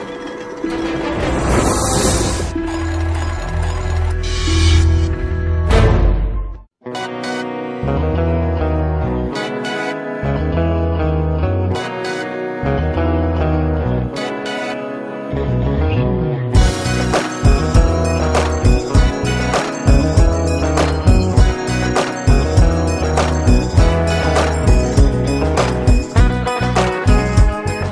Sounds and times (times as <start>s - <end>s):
Music: 0.0s - 27.9s.